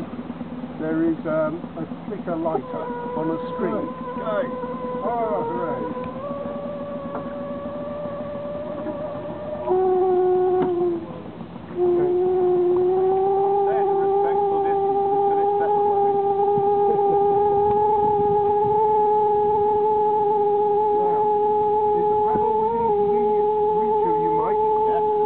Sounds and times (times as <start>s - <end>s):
Speech: 22.0s - 25.1s.